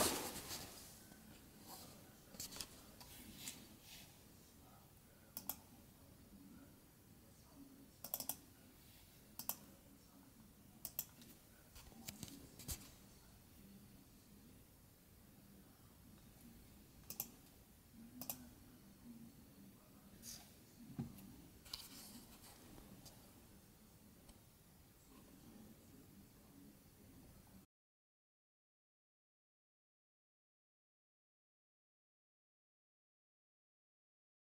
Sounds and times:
Inside, small room: 0.0s - 27.7s.

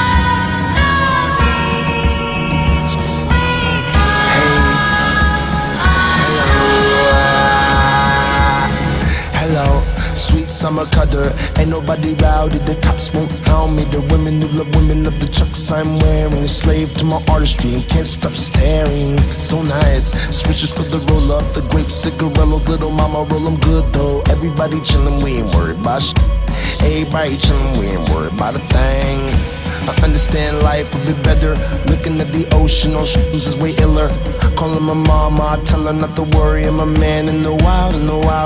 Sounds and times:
New-age music: 0.0s - 38.4s.

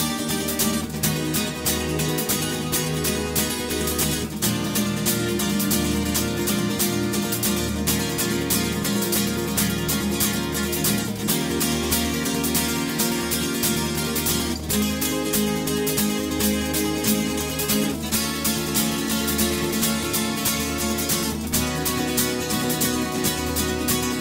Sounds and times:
Music: 0.0s - 24.2s.

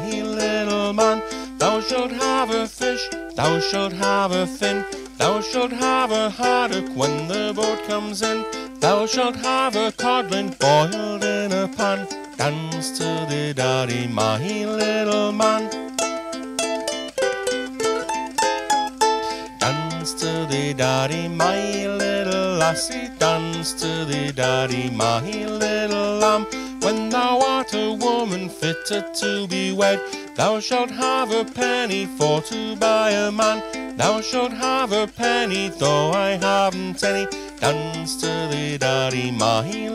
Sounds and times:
Music: 0.0s - 39.9s.

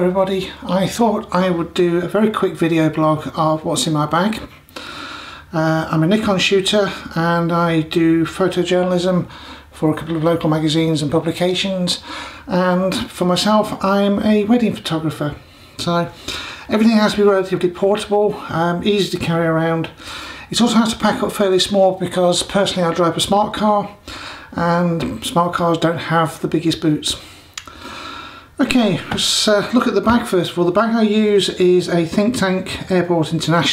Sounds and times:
Speech: 0.0s - 4.6s, 5.5s - 27.2s, 28.6s - 33.7s.

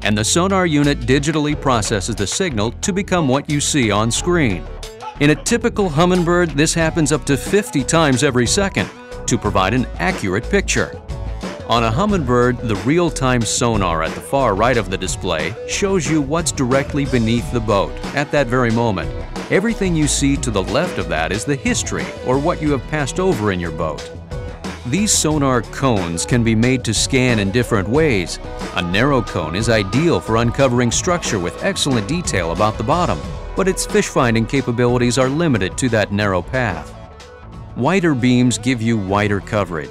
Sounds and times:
Speech: 0.0s - 11.0s, 11.7s - 24.1s, 24.9s - 36.9s, 37.8s - 39.9s
Music: 0.0s - 39.9s.

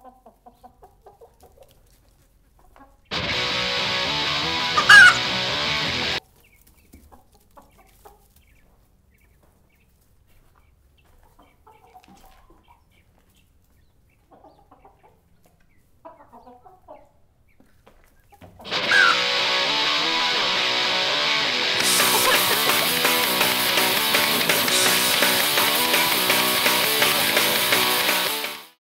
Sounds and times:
Cluck: 0.0s - 3.1s, 4.8s - 5.3s, 6.2s - 19.3s, 21.8s - 23.2s.

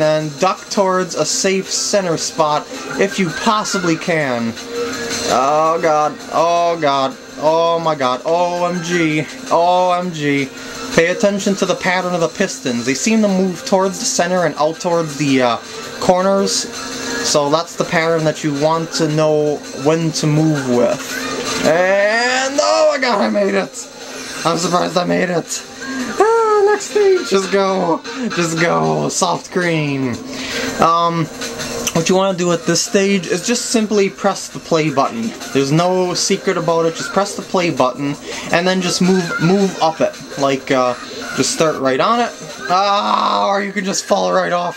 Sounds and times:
Speech: 0.0s - 4.6s, 5.3s - 16.7s, 17.3s - 21.0s, 21.6s - 30.2s, 31.9s - 44.7s
Music: 0.0s - 44.7s.

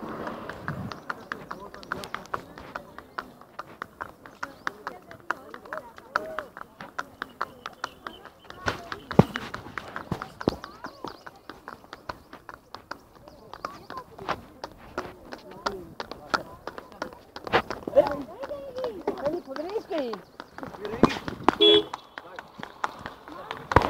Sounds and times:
Clip-clop: 0.0s - 23.9s
Speech: 1.2s - 21.3s.

